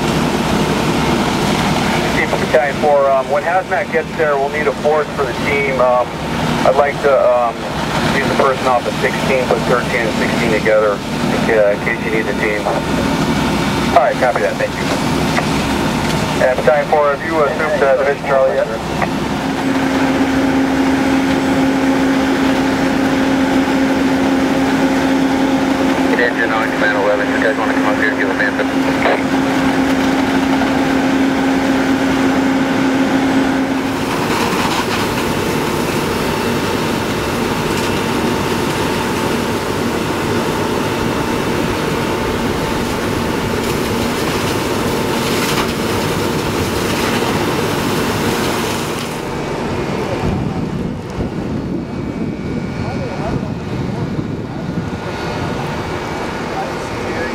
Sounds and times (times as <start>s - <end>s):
Wind noise (microphone): 49.5s - 57.3s.